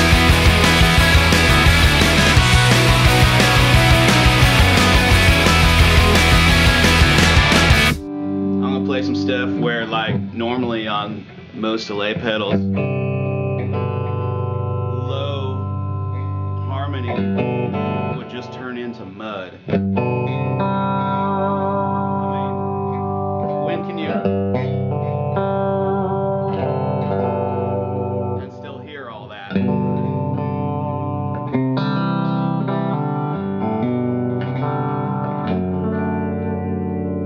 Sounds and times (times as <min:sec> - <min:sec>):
Music: 0:00.0 - 0:37.2
Speech: 0:08.6 - 0:12.6, 0:14.9 - 0:15.6, 0:16.7 - 0:17.3, 0:18.2 - 0:19.6, 0:22.2 - 0:22.6, 0:23.6 - 0:24.3, 0:28.4 - 0:29.7.